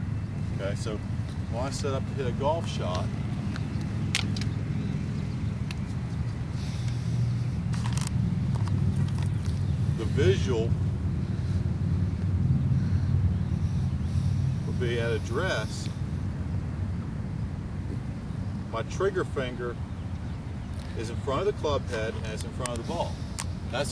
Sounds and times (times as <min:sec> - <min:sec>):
Speech: 0:00.6 - 0:03.1, 0:21.0 - 0:23.2.